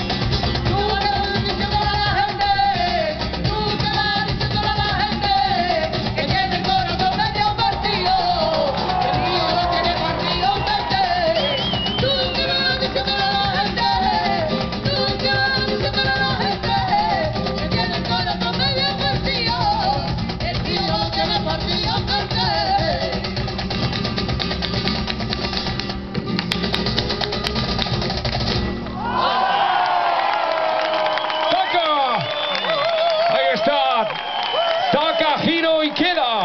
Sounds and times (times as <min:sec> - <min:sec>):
Flamenco: 0:00.0 - 0:36.0.